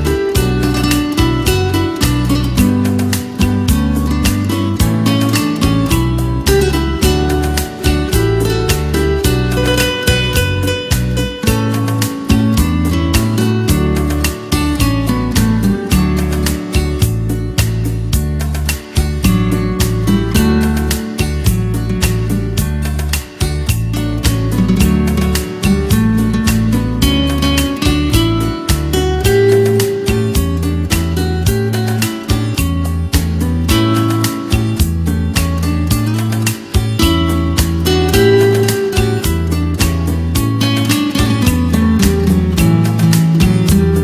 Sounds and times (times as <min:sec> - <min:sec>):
Electric guitar: 0:00.0 - 0:44.0
Strum: 0:00.0 - 0:44.0.